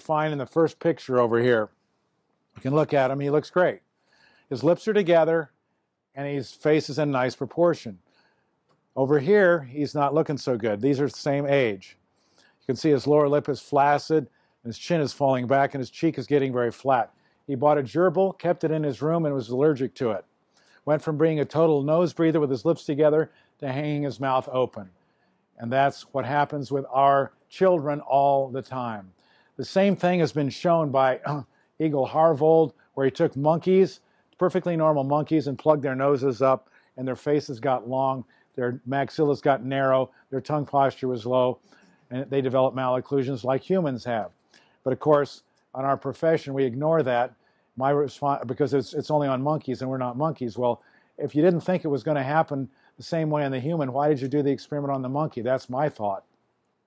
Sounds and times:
Speech: 0.0 - 1.8, 2.6 - 3.8, 4.5 - 5.6, 6.2 - 8.0, 9.0 - 12.0, 12.7 - 24.9, 25.6 - 56.3.

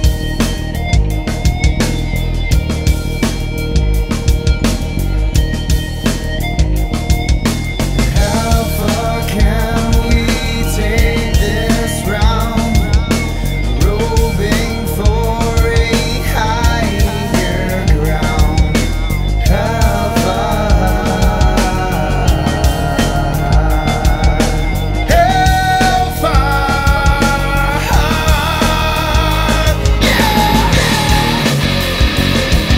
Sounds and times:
Psychedelic rock: 0.0 - 32.7
Ska: 0.0 - 32.7.

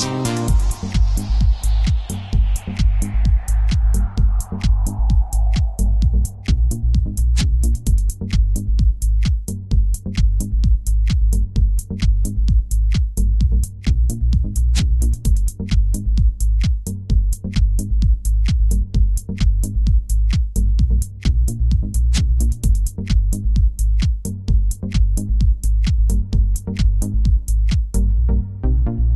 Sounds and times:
Music: 0.0 - 29.1.

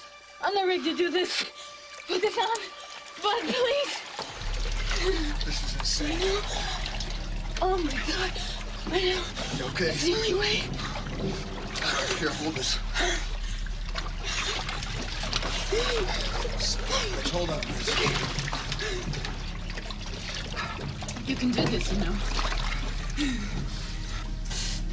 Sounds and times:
Trickle, dribble: 1.2 - 24.4.

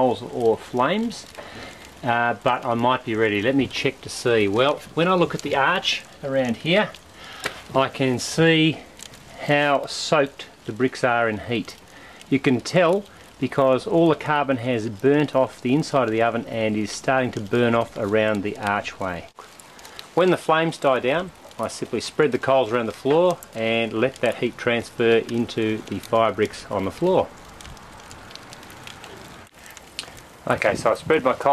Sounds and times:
Speech: 0.0 - 1.4, 2.0 - 7.0, 7.7 - 8.8, 9.4 - 19.3, 20.2 - 27.3, 30.4 - 31.5.

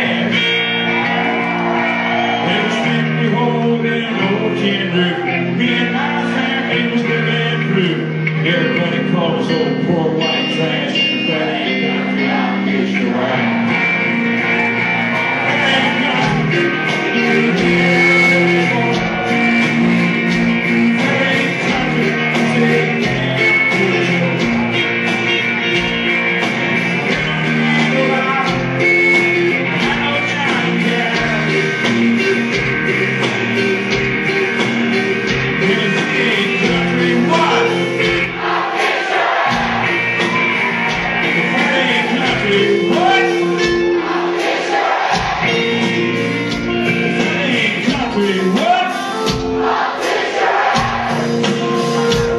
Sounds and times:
Country: 0.0 - 52.3.

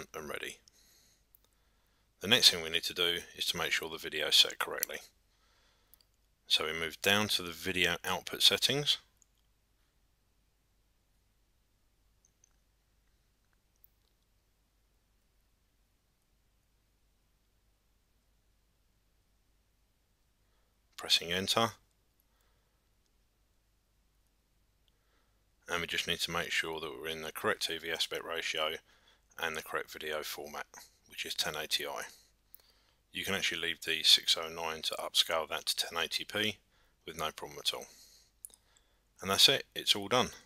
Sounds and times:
Silence: 0.0 - 37.1, 37.8 - 40.4.

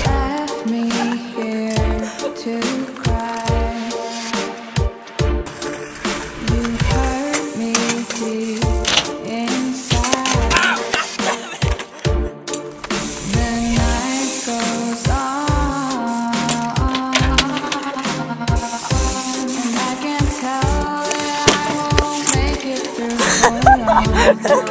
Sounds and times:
Bicycle: 5.0 - 9.3.

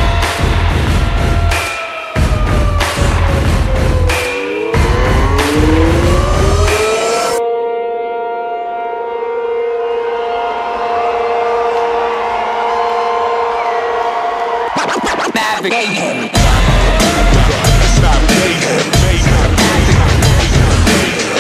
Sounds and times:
Music: 0.0 - 21.4.

